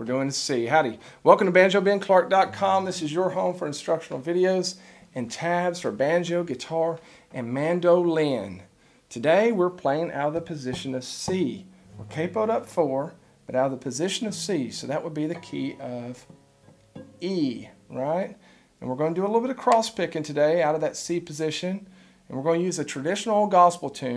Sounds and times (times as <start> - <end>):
Speech: 0.0 - 16.3, 17.2 - 24.1.